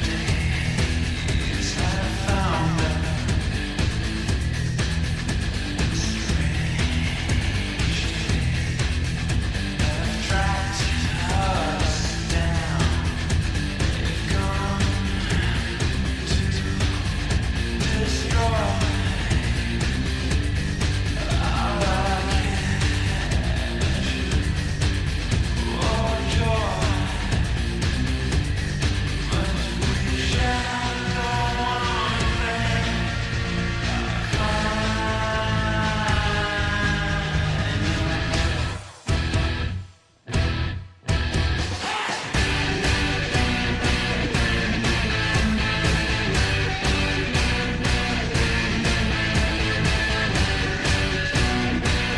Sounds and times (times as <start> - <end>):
Music: 0.0 - 52.1.